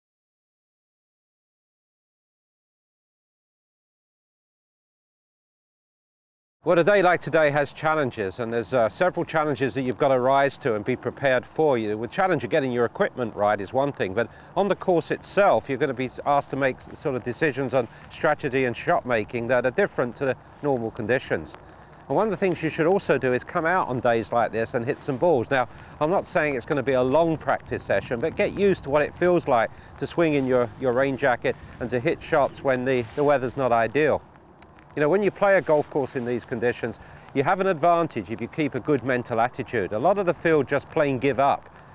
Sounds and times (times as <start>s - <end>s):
Speech: 6.7s - 34.2s, 35.0s - 41.7s.